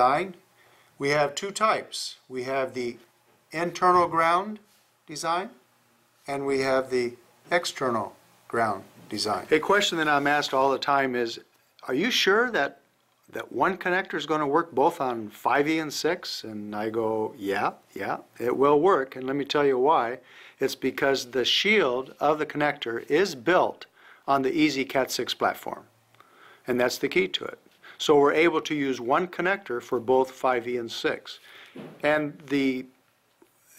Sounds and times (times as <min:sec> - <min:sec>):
Speech: 0:00.0 - 0:00.4, 0:01.0 - 0:05.6, 0:06.2 - 0:25.9, 0:26.7 - 0:31.4, 0:32.0 - 0:33.0.